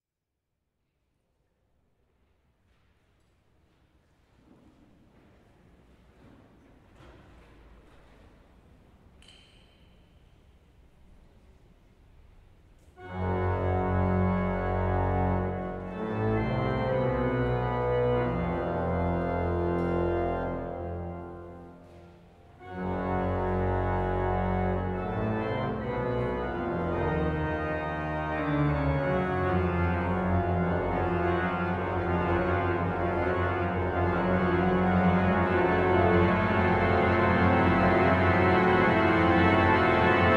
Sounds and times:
Music: 0:12.8 - 0:40.3.

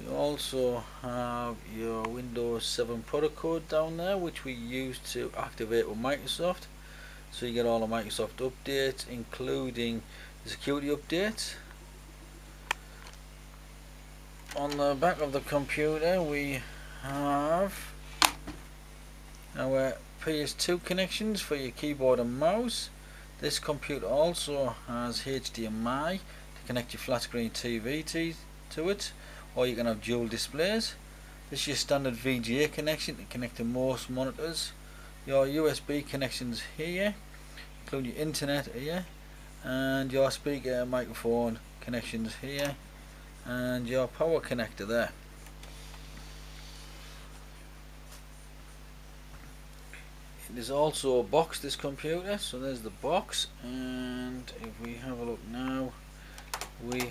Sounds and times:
Speech: 0:00.0 - 0:06.7, 0:07.3 - 0:11.7, 0:14.5 - 0:18.0, 0:19.5 - 0:37.2, 0:37.9 - 0:42.8, 0:43.4 - 0:45.2, 0:50.4 - 0:56.0, 0:56.8 - 0:57.1.

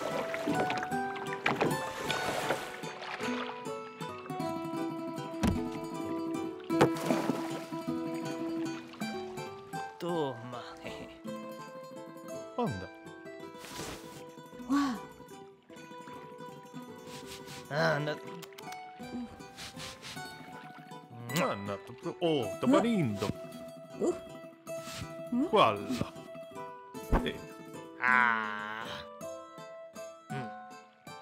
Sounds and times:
Music: 0:00.0 - 0:31.2
Speech: 0:10.0 - 0:11.1, 0:17.7 - 0:18.3, 0:21.2 - 0:23.4, 0:25.4 - 0:26.1.

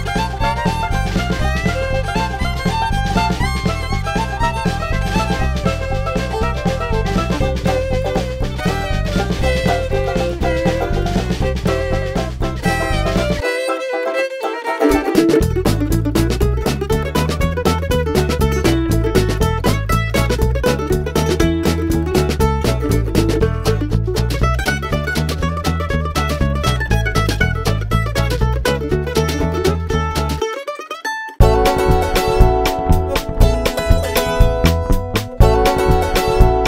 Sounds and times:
Music: 0:00.0 - 0:36.6.

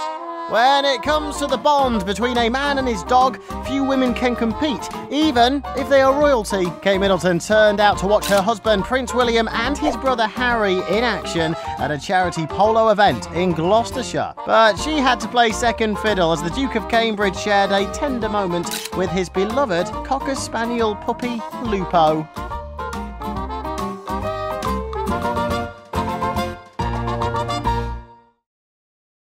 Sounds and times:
Music: 0:00.0 - 0:28.5
Speech: 0:00.5 - 0:22.3.

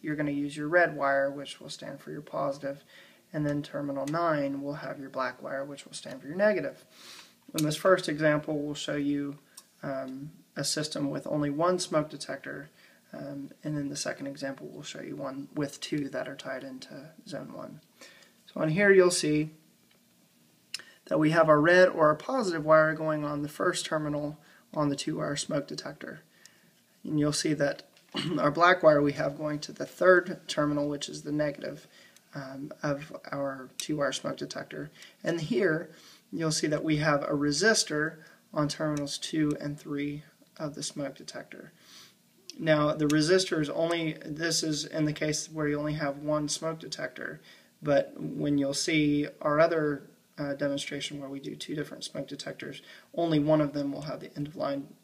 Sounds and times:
Speech: 0:00.0 - 0:06.9, 0:07.5 - 0:17.8, 0:18.5 - 0:19.6, 0:21.0 - 0:26.3, 0:27.0 - 0:41.8, 0:42.5 - 0:55.0.

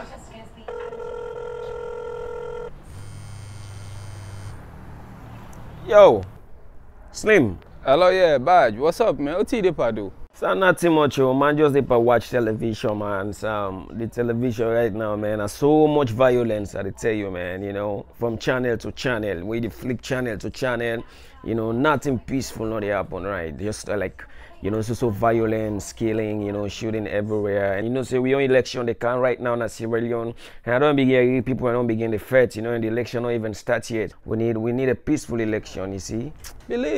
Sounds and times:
Speech: 0:00.0 - 0:00.8, 0:07.2 - 0:36.9.

